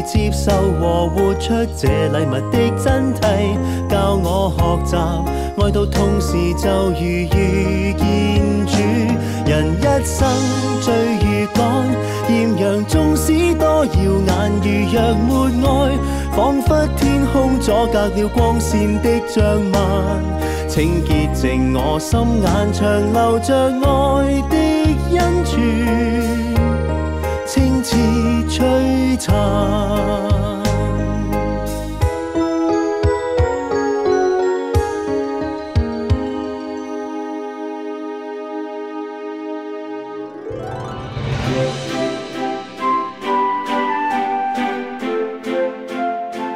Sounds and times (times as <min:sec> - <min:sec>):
Music: 0:00.0 - 0:46.5.